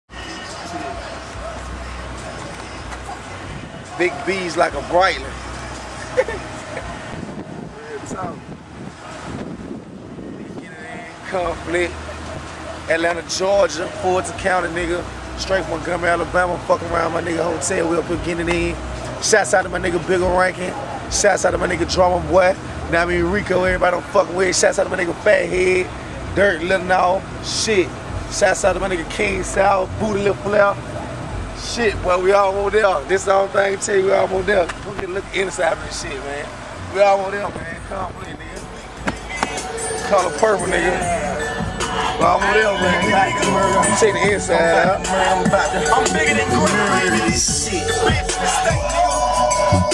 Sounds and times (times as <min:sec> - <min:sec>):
Car: 0:00.0 - 0:49.9
Outside, urban or manmade: 0:00.0 - 0:49.9
Speech: 0:03.9 - 0:05.4, 0:10.6 - 0:12.0, 0:12.9 - 0:30.8, 0:31.6 - 0:38.7.